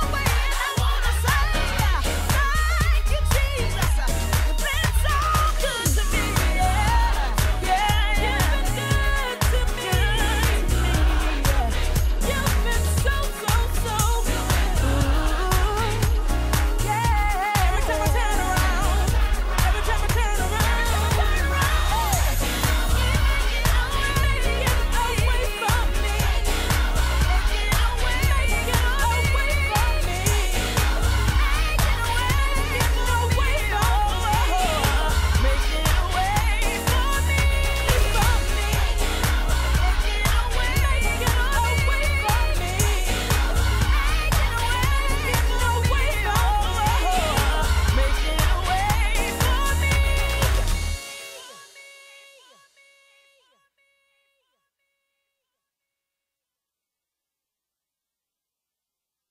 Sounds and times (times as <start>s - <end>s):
Inside, public space: 0.0s - 51.8s
Gospel music: 0.0s - 52.1s
Choir: 0.0s - 52.9s.